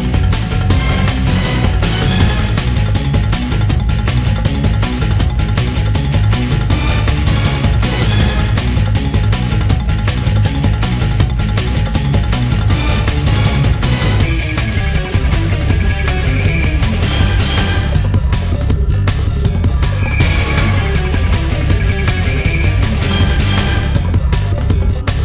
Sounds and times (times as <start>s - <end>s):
Background music: 0.0s - 25.2s
Dance music: 0.0s - 25.2s.